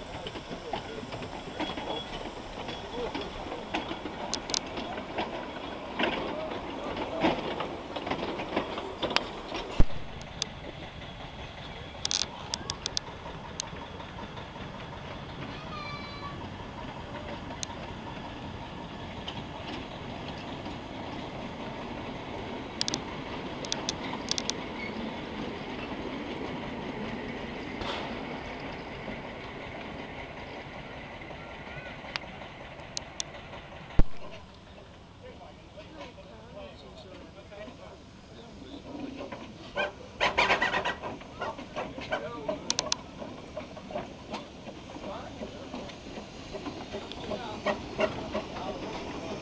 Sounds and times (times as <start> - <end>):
Railroad car, train wagon: 0.0 - 49.4
Train: 0.0 - 49.4
Speech: 35.2 - 39.2, 42.0 - 42.8, 47.0 - 49.1.